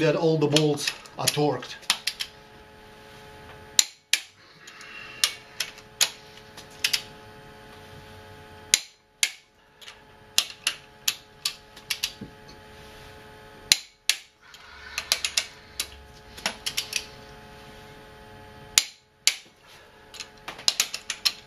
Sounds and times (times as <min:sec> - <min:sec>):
Inside, small room: 0:00.0 - 0:21.4.